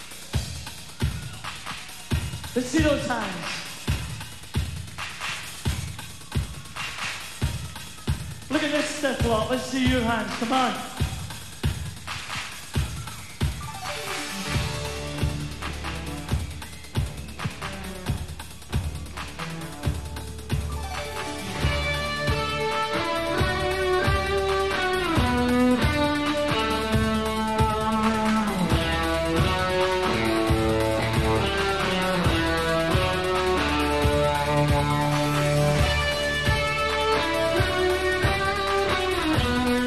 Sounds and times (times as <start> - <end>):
Music: 0.0 - 39.8.